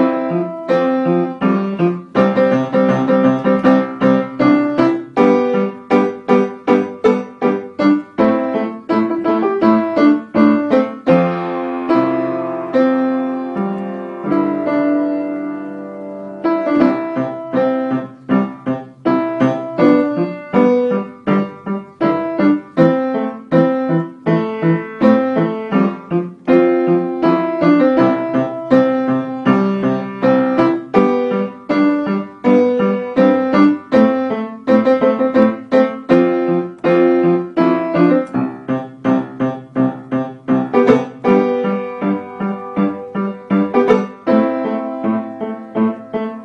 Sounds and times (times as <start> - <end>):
Piano: 0.0 - 46.4.